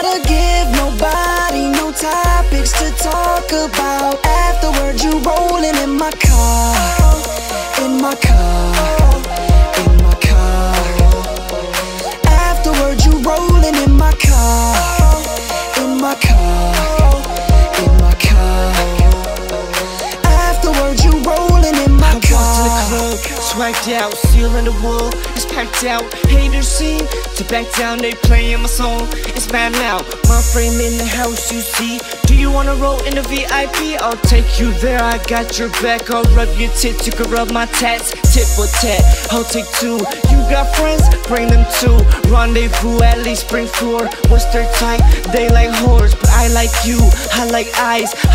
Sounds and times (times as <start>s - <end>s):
Music: 0.0s - 48.3s.